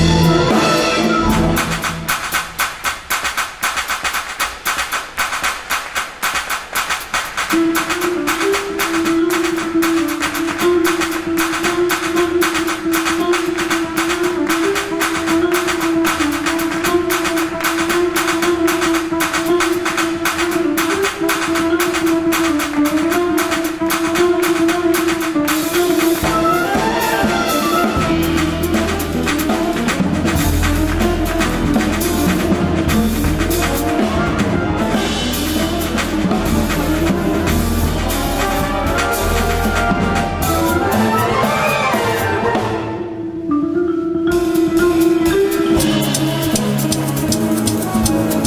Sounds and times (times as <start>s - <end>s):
Music: 0.0s - 48.4s.